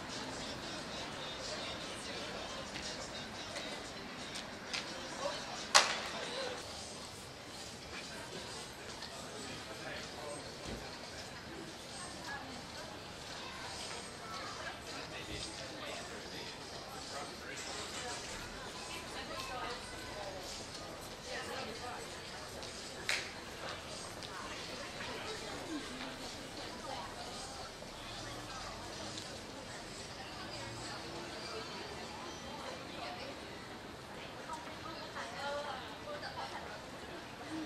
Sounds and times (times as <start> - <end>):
Speech: 0.0 - 37.6.